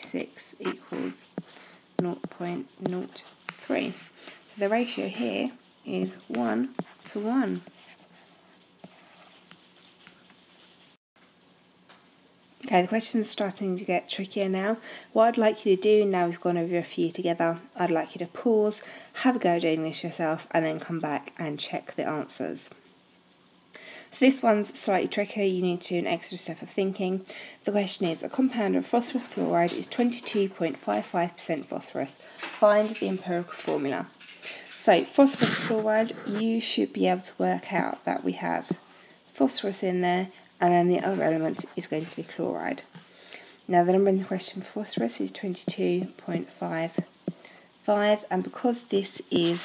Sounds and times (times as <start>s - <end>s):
Speech: 0.0s - 1.4s, 2.0s - 7.7s, 12.6s - 22.8s, 24.1s - 34.1s, 34.8s - 43.0s, 43.7s - 47.1s, 47.8s - 49.6s
Inside, small room: 0.0s - 49.6s
Writing: 2.0s - 5.4s, 6.3s - 10.9s.